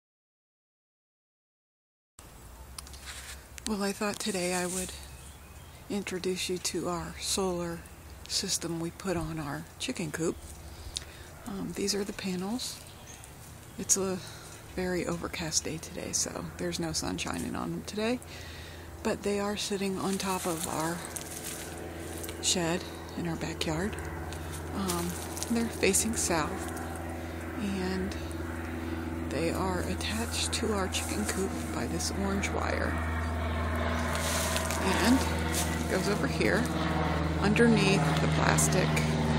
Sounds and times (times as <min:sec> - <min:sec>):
Speech: 0:03.7 - 0:05.1, 0:05.9 - 0:10.4, 0:11.5 - 0:12.8, 0:13.8 - 0:18.2, 0:19.0 - 0:21.1, 0:22.4 - 0:24.0, 0:24.7 - 0:26.7, 0:27.6 - 0:28.2, 0:29.3 - 0:33.0, 0:34.8 - 0:35.3, 0:35.9 - 0:36.7, 0:37.4 - 0:39.2.